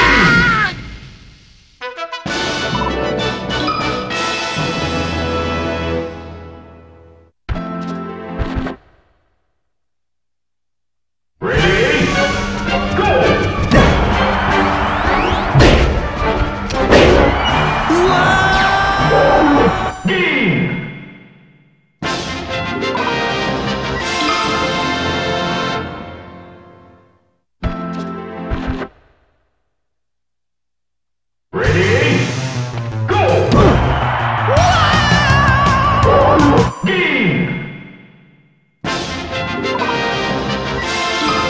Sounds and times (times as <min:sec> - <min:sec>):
Music: 0:00.0 - 0:08.8, 0:11.5 - 0:21.0, 0:22.0 - 0:29.0, 0:31.6 - 0:38.2, 0:38.8 - 0:41.5
Smash, crash: 0:13.0 - 0:14.4, 0:15.1 - 0:18.6.